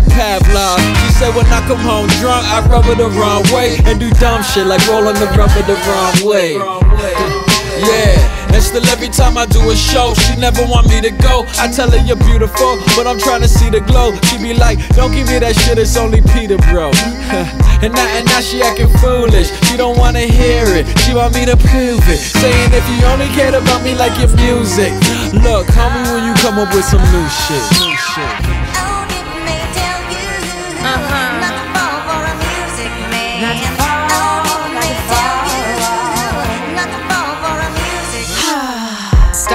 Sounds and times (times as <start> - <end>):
Jazz: 0.0 - 38.5
Dance music: 0.0 - 39.5.